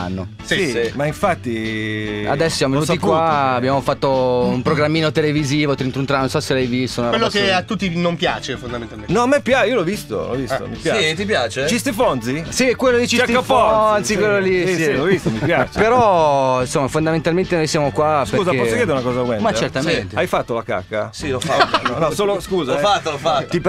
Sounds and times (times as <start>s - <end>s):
Music: 0.0s - 23.6s
Speech: 0.0s - 23.6s.